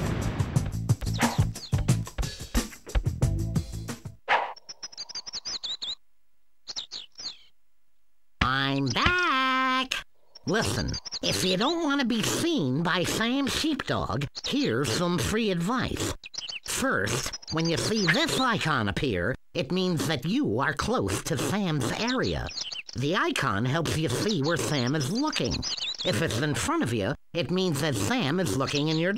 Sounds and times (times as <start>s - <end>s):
Speech: 8.4s - 29.1s.